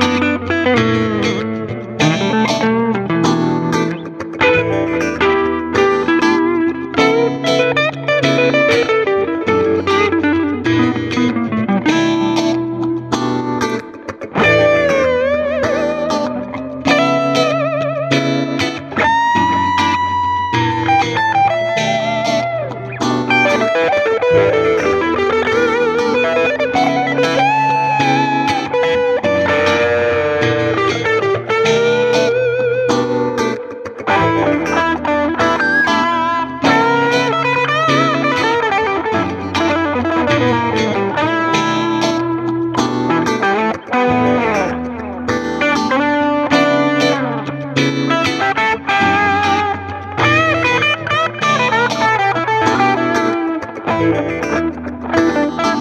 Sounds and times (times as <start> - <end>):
Tapping (guitar technique): 0.0 - 55.8.